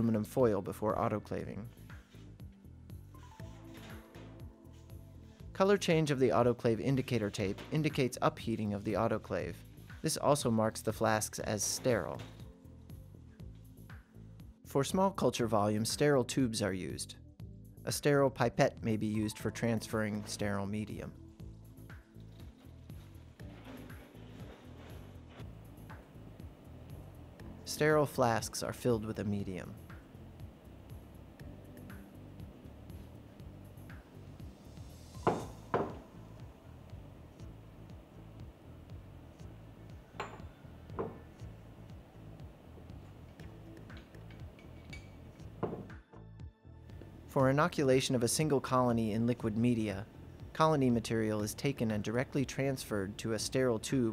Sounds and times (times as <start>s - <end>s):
Speech: 0.0s - 1.7s, 5.6s - 12.3s, 14.7s - 17.2s, 17.9s - 21.2s, 27.7s - 29.8s, 47.3s - 54.1s.